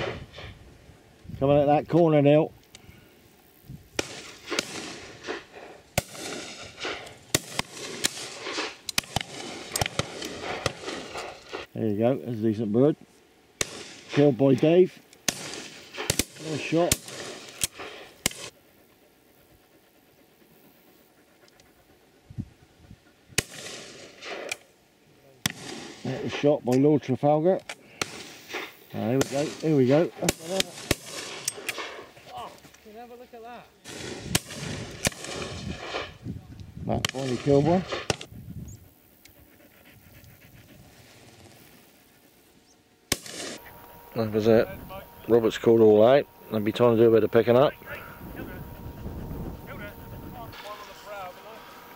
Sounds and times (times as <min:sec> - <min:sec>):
Pant: 0:05.1 - 0:06.0, 0:17.8 - 0:23.5, 0:38.8 - 0:42.6, 0:47.8 - 0:51.9
Speech: 0:11.8 - 0:13.0, 0:14.2 - 0:15.0, 0:16.4 - 0:17.0, 0:26.0 - 0:27.6, 0:28.9 - 0:30.7, 0:44.2 - 0:48.7, 0:49.7 - 0:51.7.